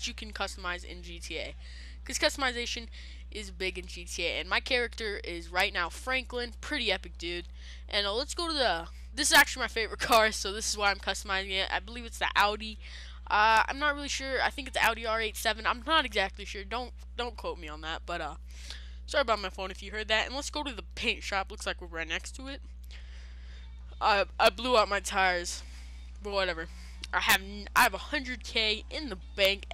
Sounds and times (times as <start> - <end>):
Speech: 0.0 - 18.4, 19.1 - 22.6, 24.0 - 25.6, 26.2 - 29.7.